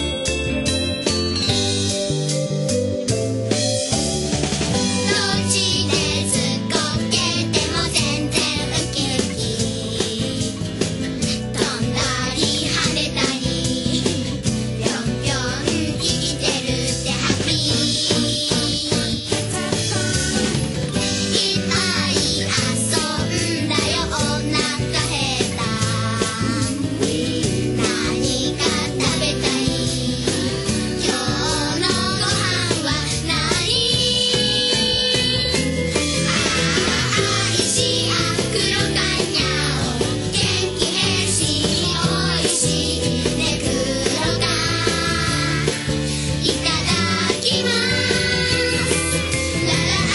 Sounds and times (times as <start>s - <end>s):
Music: 0.0s - 50.1s.